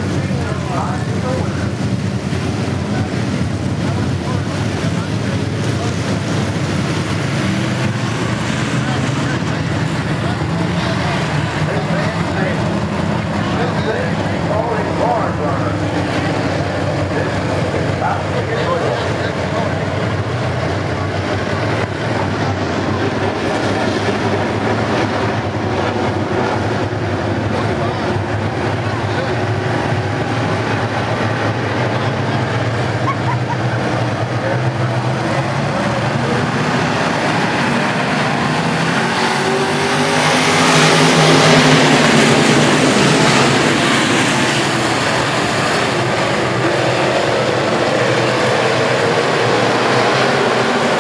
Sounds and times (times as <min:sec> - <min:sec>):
Speech: 0:00.0 - 0:01.8, 0:02.8 - 0:06.4, 0:08.8 - 0:12.7, 0:13.3 - 0:16.3, 0:17.0 - 0:20.0, 0:27.4 - 0:29.6.